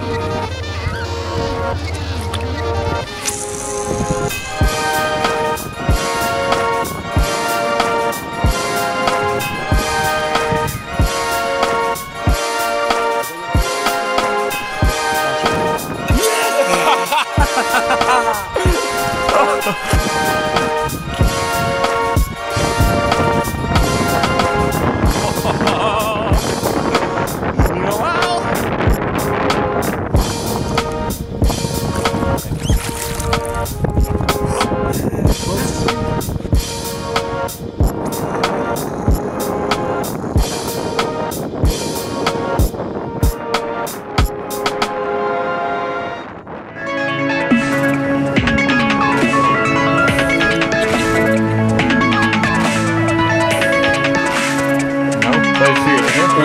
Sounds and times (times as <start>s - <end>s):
Music: 0.0s - 56.4s.